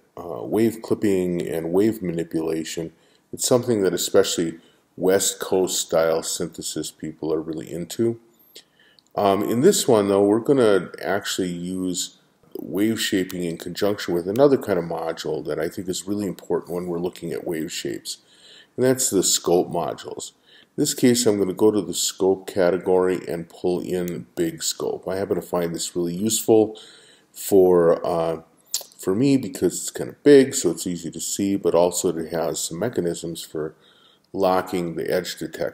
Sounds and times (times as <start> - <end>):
Speech: 0.0 - 8.3, 9.1 - 35.7.